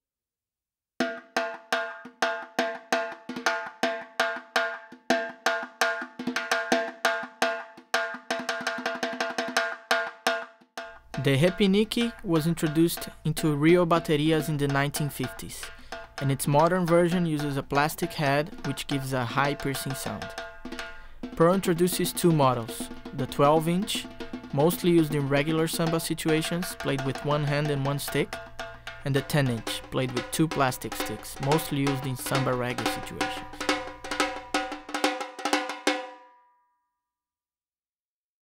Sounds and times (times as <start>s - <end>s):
Music: 1.0s - 37.2s
Speech: 11.2s - 20.3s, 21.4s - 28.3s, 29.0s - 33.6s.